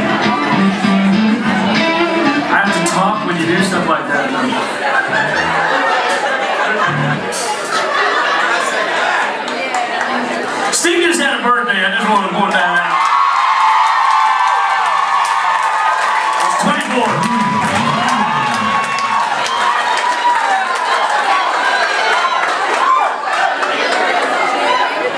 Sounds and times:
Music: 0.0 - 3.8, 5.1 - 5.7, 6.9 - 7.4
Speech: 2.5 - 4.6, 9.7 - 13.0, 16.5 - 18.8.

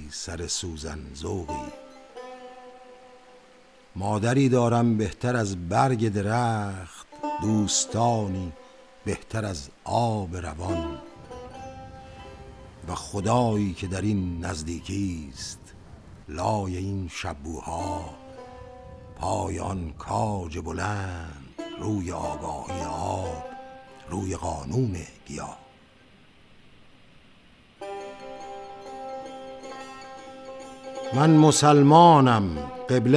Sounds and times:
Speech: 0.0 - 1.8, 4.0 - 11.0, 12.9 - 15.7, 16.3 - 18.2, 19.2 - 23.5, 24.1 - 25.7, 31.1 - 33.1
Music: 0.0 - 15.8, 17.1 - 25.9, 27.8 - 33.1.

